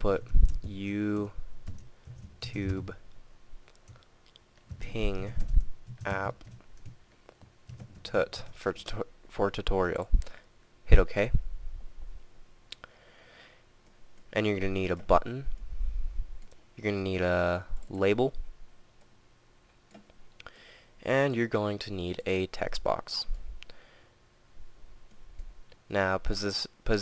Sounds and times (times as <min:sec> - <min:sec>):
Speech: 0:00.0 - 0:01.4, 0:02.4 - 0:03.0, 0:04.8 - 0:05.4, 0:06.0 - 0:06.4, 0:08.0 - 0:10.2, 0:10.9 - 0:11.4, 0:14.3 - 0:15.5, 0:16.8 - 0:18.4, 0:21.0 - 0:23.4, 0:25.9 - 0:27.0.